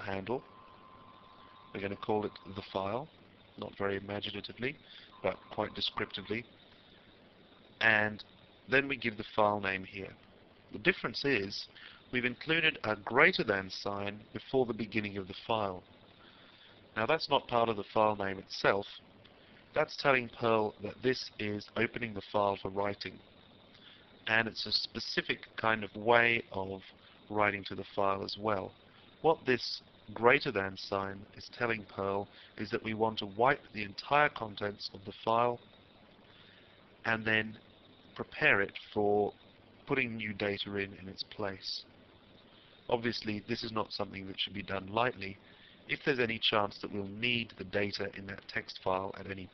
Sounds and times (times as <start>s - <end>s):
Speech: 0.0s - 0.4s, 1.8s - 6.5s, 7.8s - 10.2s, 10.8s - 15.8s, 17.0s - 19.0s, 19.8s - 23.2s, 24.3s - 35.6s, 37.1s - 37.6s, 38.2s - 41.9s, 42.9s - 49.5s.